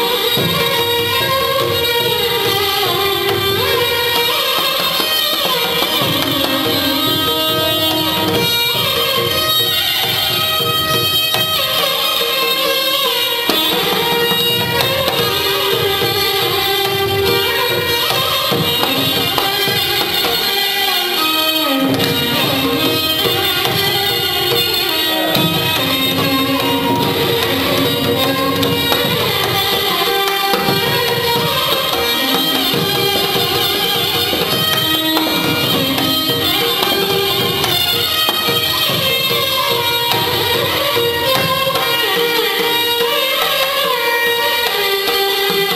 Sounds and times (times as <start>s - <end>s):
Violin, fiddle: 0.0s - 45.7s.